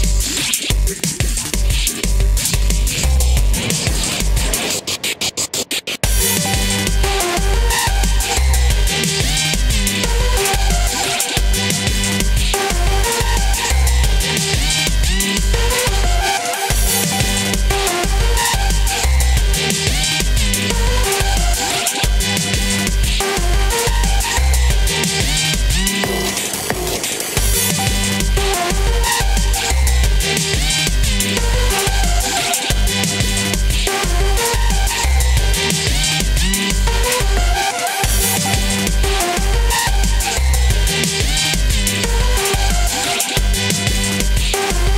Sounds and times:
Dubstep: 0.0s - 44.9s.

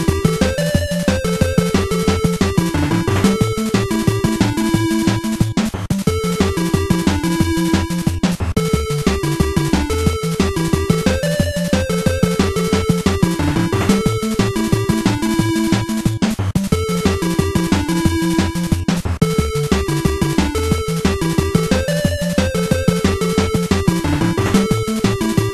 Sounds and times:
Video game music: 0.0s - 25.5s.

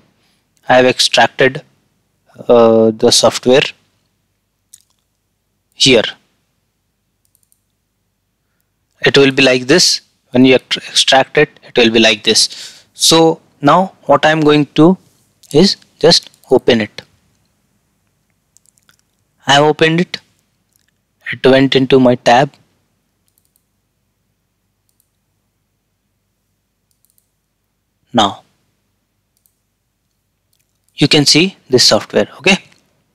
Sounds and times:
Speech: 0.6s - 1.7s, 2.3s - 3.8s, 5.8s - 6.2s, 9.0s - 17.1s, 19.4s - 20.3s, 21.2s - 22.6s, 28.1s - 28.5s, 31.0s - 32.8s
Clicking: 7.2s - 7.8s, 18.6s - 19.2s, 23.2s - 23.7s, 24.8s - 25.2s, 26.9s - 27.3s, 29.4s - 30.9s.

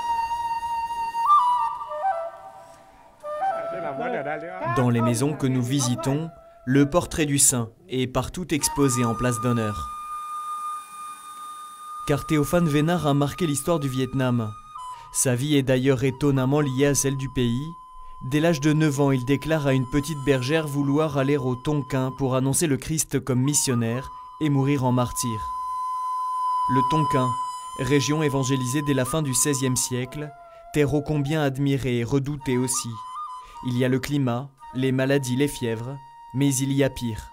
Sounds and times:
Music: 0.0s - 7.5s, 8.2s - 37.3s
Speech: 3.6s - 9.9s, 12.1s - 14.6s, 15.2s - 25.5s, 26.7s - 33.0s, 33.7s - 37.3s.

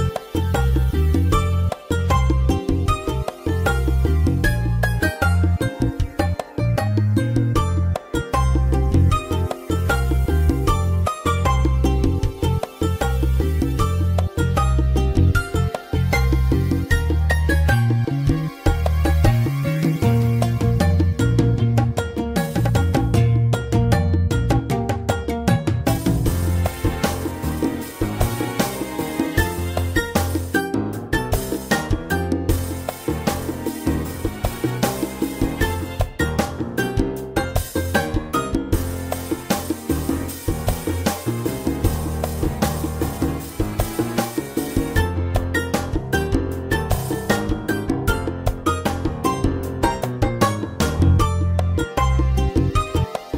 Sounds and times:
Music: 0.0s - 53.3s.

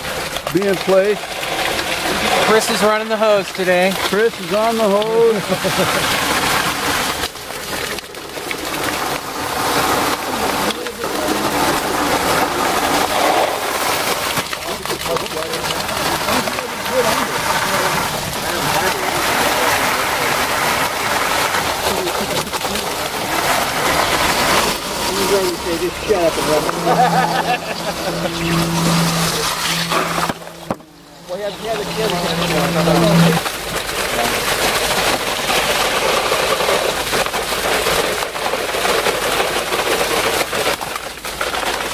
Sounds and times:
Trickle, dribble: 0.0s - 41.9s.

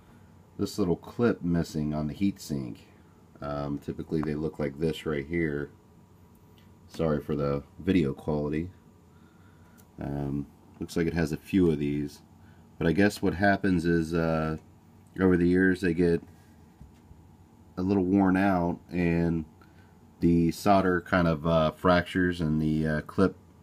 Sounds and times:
Speech: 0.6s - 5.8s, 6.9s - 8.8s, 10.0s - 16.3s, 17.8s - 19.5s, 20.2s - 23.4s.

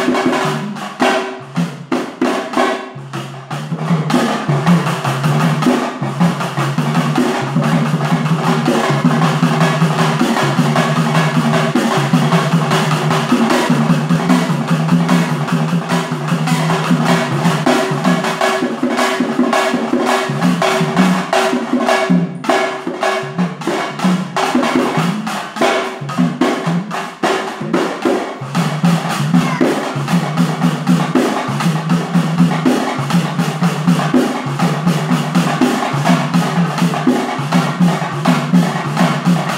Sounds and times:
Music: 0.0s - 39.5s.

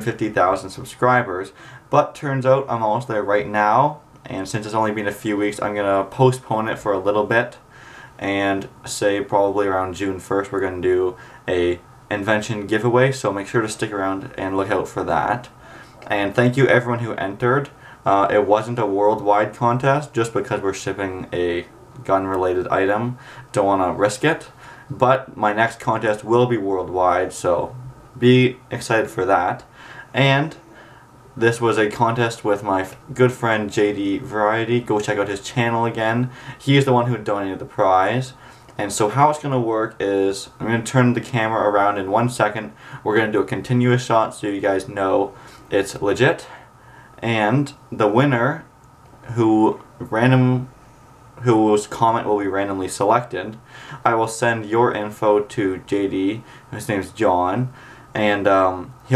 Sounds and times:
Speech: 0.0s - 30.6s, 31.4s - 46.6s, 47.2s - 50.7s, 51.4s - 59.1s.

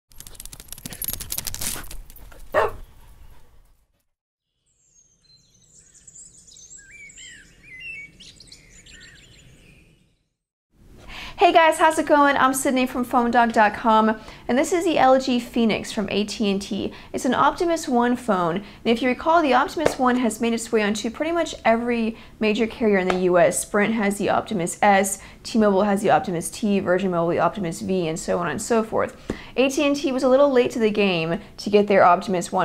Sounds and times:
Outside, rural or natural: 0.1s - 10.4s
Chirp, tweet: 4.5s - 10.4s.

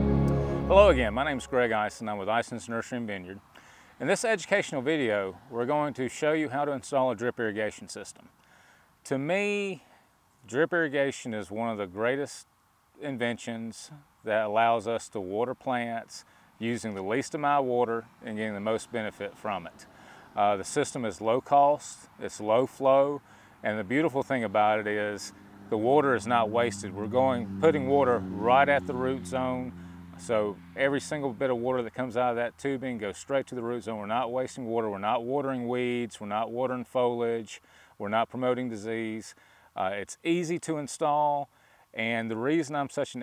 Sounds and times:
Speech: 0.6s - 3.4s, 4.0s - 8.3s, 9.0s - 43.2s.

